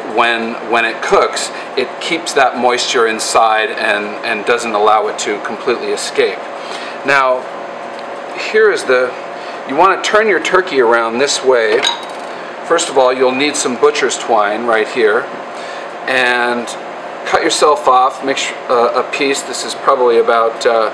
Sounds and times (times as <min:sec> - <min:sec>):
Speech: 0:00.0 - 0:06.4, 0:07.0 - 0:07.5, 0:08.4 - 0:11.9, 0:12.7 - 0:15.3, 0:16.1 - 0:20.9.